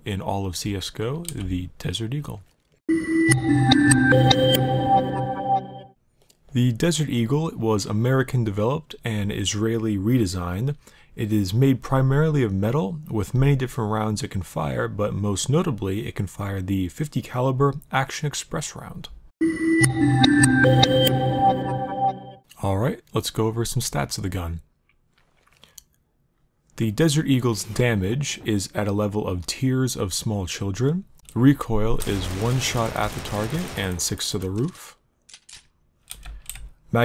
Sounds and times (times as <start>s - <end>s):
Speech: 0.0s - 2.5s, 6.5s - 19.2s, 22.5s - 24.7s, 26.8s - 35.0s
Music: 2.9s - 6.0s, 19.4s - 22.4s.